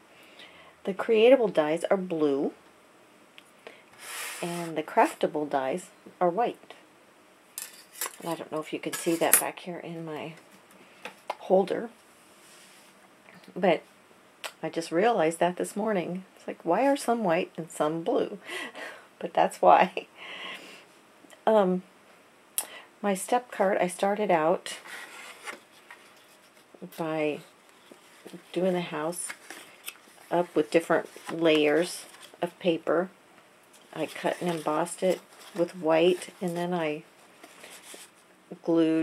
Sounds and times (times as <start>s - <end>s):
Speech: 0.9s - 2.6s, 4.4s - 6.8s, 8.2s - 10.4s, 11.4s - 11.9s, 13.5s - 13.8s, 14.6s - 18.4s, 19.2s - 20.1s, 21.4s - 21.8s, 23.0s - 24.8s, 26.8s - 27.5s, 28.3s - 29.3s, 30.3s - 33.1s, 33.9s - 37.0s, 38.5s - 39.0s.